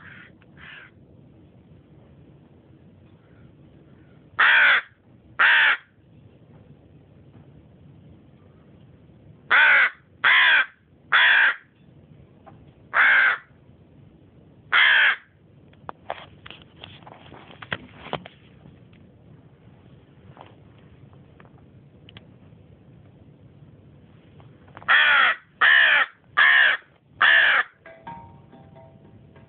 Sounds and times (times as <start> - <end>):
Caw: 0.0 - 0.9, 3.2 - 5.9, 9.5 - 11.7, 13.0 - 13.5, 14.7 - 15.3, 24.9 - 27.8.